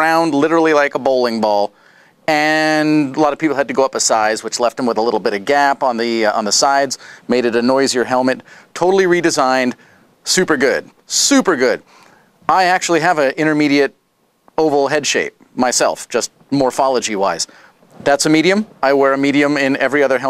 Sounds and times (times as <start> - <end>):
Speech: 0.0 - 1.7, 2.3 - 11.8, 12.5 - 14.0, 14.6 - 20.2.